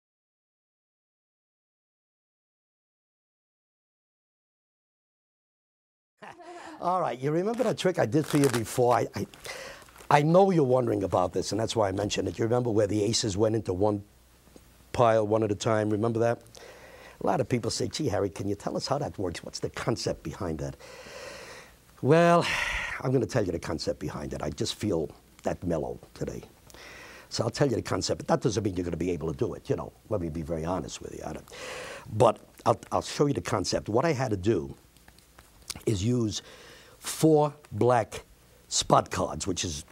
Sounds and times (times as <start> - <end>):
Speech: 6.2 - 9.4, 10.1 - 14.1, 14.9 - 16.4, 17.2 - 20.8, 22.0 - 26.5, 27.3 - 31.5, 32.1 - 34.8, 35.7 - 36.4, 37.0 - 39.9.